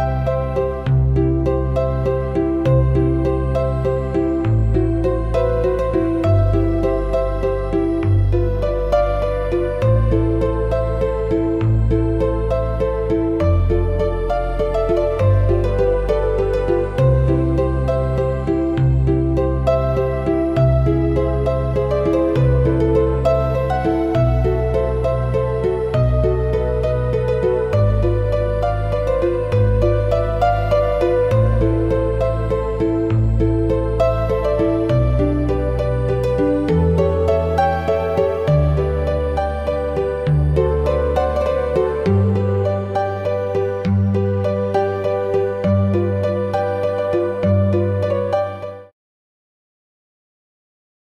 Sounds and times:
Classical music: 0.0 - 48.9.

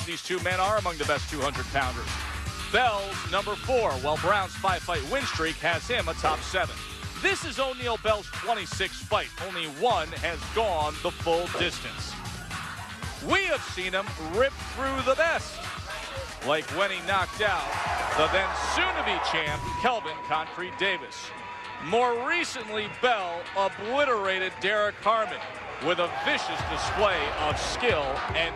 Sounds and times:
Speech: 0.0 - 2.1, 2.8 - 12.1, 13.2 - 15.6, 16.4 - 28.5
Music: 0.0 - 28.5.

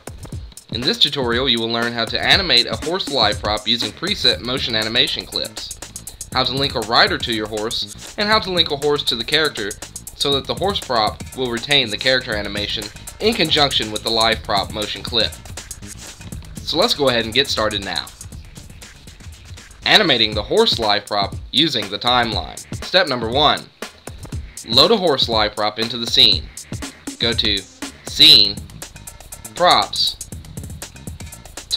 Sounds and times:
Music: 0.0 - 31.7
Speech: 0.7 - 5.8, 6.4 - 15.4, 16.6 - 18.2, 19.8 - 23.7, 24.6 - 26.5, 27.2 - 28.6, 29.5 - 30.2.

